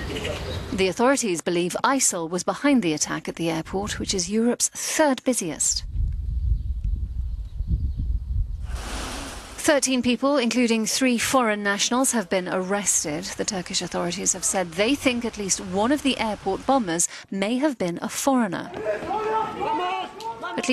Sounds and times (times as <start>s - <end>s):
Speech: 0.2s - 5.8s, 9.6s - 20.7s.